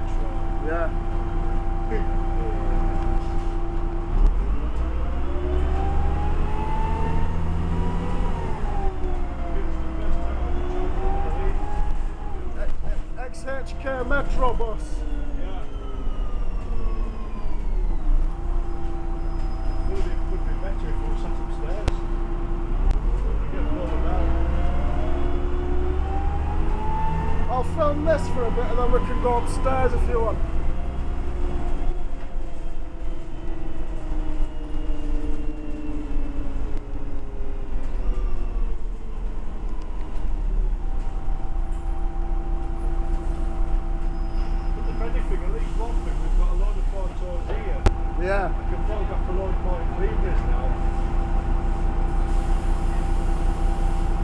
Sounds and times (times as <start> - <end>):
Speech: 0.0 - 1.0, 1.8 - 2.9, 12.6 - 15.8, 19.9 - 22.0, 23.4 - 24.4, 27.5 - 30.4, 44.9 - 50.8
Bus: 0.0 - 54.2.